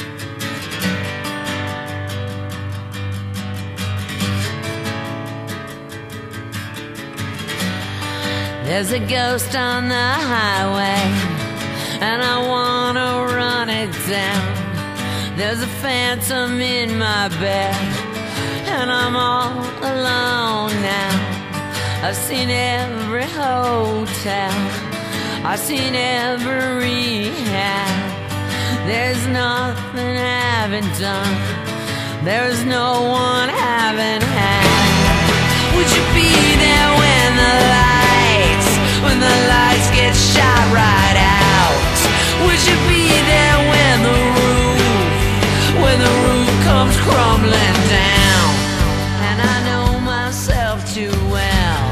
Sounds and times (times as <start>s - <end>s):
Music: 0.0s - 51.9s.